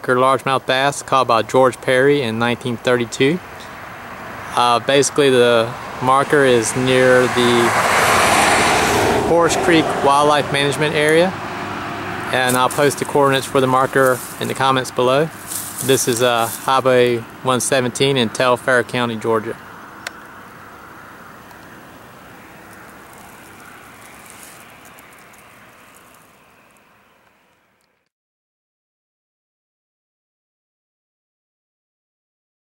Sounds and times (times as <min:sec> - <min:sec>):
Speech: 0:00.0 - 0:03.4, 0:04.5 - 0:07.7, 0:09.3 - 0:11.4, 0:12.3 - 0:19.6
Outside, rural or natural: 0:00.0 - 0:28.1
Vehicle: 0:00.0 - 0:28.1.